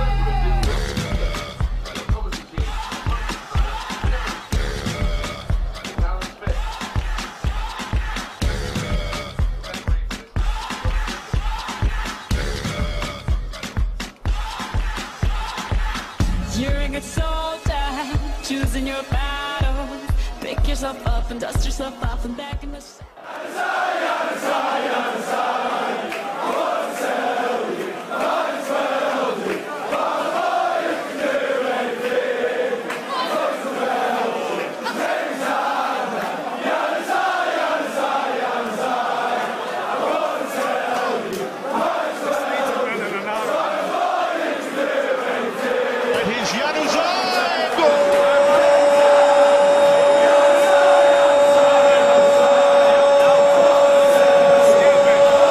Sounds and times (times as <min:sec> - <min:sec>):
Music: 0:00.0 - 0:23.2, 0:43.4 - 0:55.5.